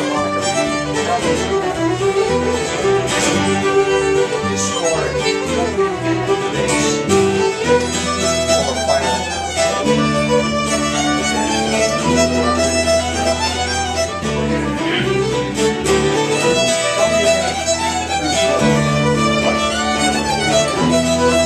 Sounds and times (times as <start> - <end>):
Violin, fiddle: 0.0 - 21.4.